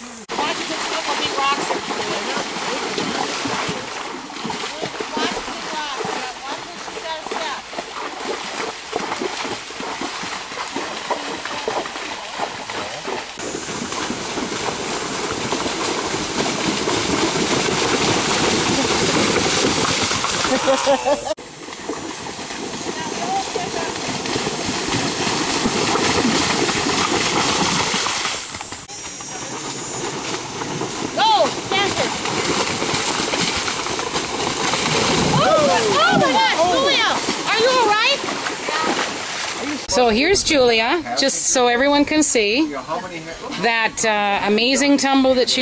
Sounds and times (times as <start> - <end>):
Clip-clop: 0.3 - 42.4.